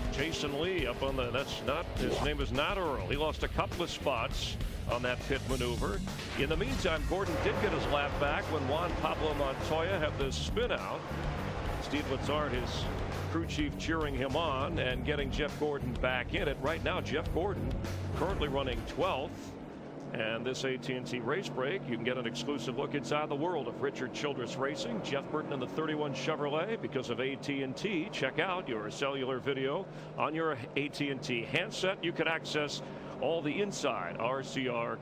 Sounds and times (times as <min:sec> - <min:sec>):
Speech: 0:00.0 - 0:11.0, 0:11.8 - 0:19.5, 0:20.1 - 0:35.0
Music: 0:00.0 - 0:19.6.